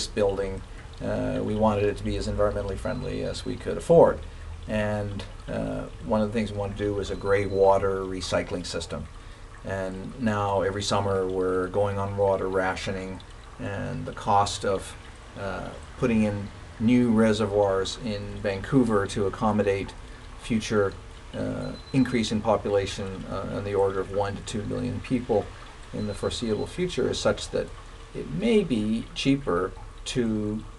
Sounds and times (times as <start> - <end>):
Speech: 0.0 - 30.7
Stream: 0.0 - 30.7.